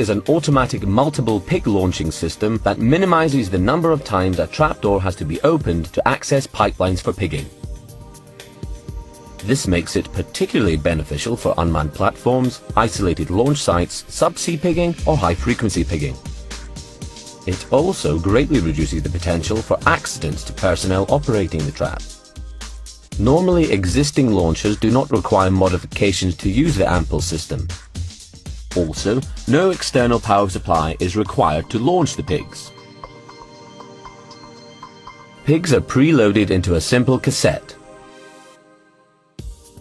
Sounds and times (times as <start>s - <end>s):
Speech: 0.0s - 7.5s, 9.4s - 16.2s, 17.5s - 22.1s, 23.2s - 27.8s, 28.7s - 32.7s, 35.5s - 37.8s
Music: 0.0s - 39.8s.